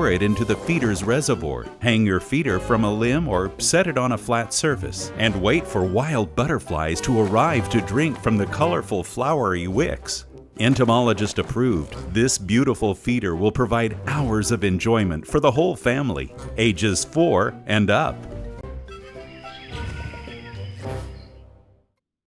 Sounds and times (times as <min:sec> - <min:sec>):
Speech: 0:00.0 - 0:18.2
Music: 0:00.0 - 0:22.0.